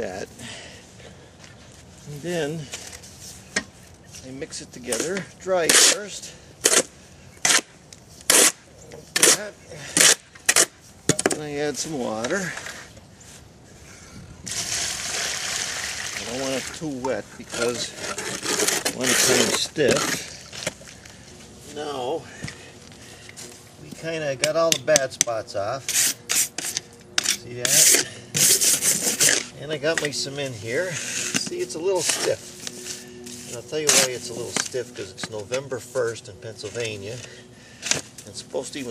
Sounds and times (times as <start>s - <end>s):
Outside, rural or natural: 0.0s - 38.9s
Water: 14.8s - 16.8s.